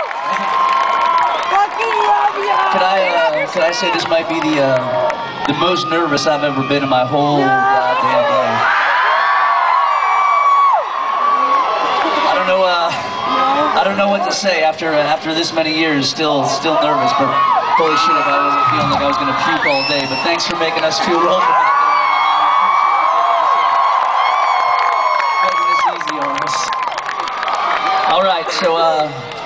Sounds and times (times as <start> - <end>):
Inside, large room or hall: 0.0 - 29.4
Speech: 1.7 - 8.6, 13.8 - 21.5, 25.5 - 26.7, 28.1 - 29.2
Whoop: 8.6 - 12.2, 21.3 - 28.1.